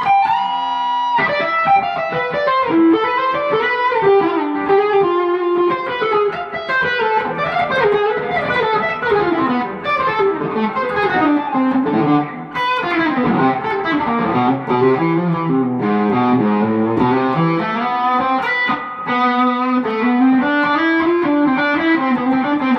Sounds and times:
Inside, small room: 0:00.0 - 0:22.7
Tapping (guitar technique): 0:00.0 - 0:22.7.

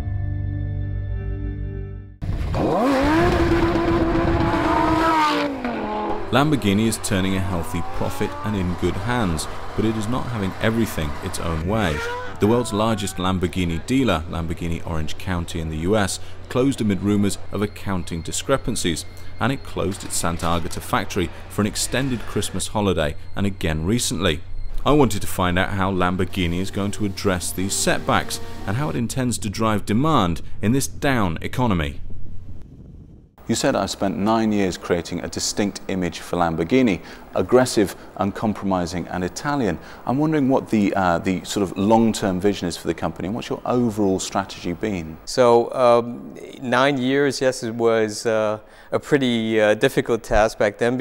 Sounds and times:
Race car, auto racing: 0:02.2 - 0:24.1, 0:26.0 - 0:29.0
Speech: 0:06.3 - 0:32.0, 0:33.4 - 0:51.0.

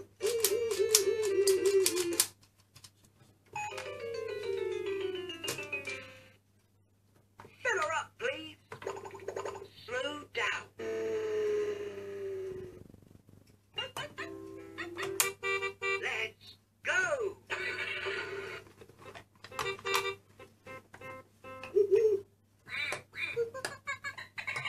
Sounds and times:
Inside, small room: 0:00.0 - 0:24.6
Music: 0:03.6 - 0:06.4, 0:14.2 - 0:16.0, 0:19.5 - 0:21.9
Speech: 0:07.6 - 0:08.6, 0:16.0 - 0:18.0.

